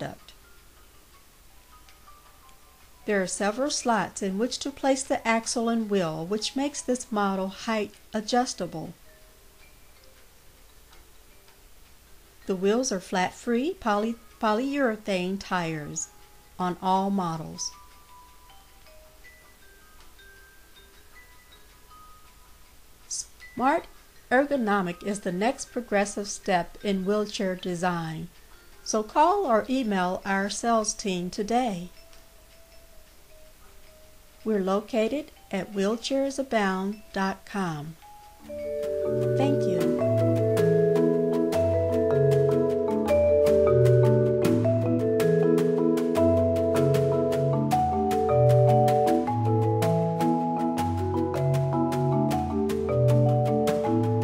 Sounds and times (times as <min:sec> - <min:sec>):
Vibraphone: 0:17.3 - 0:22.6, 0:38.0 - 0:54.2.